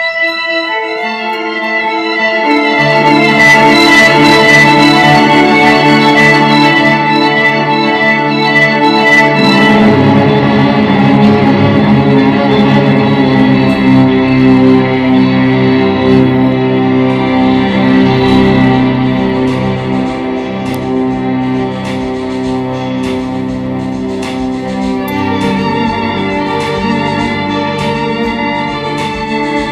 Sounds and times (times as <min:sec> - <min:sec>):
Musical instrument: 0:00.0 - 0:29.7.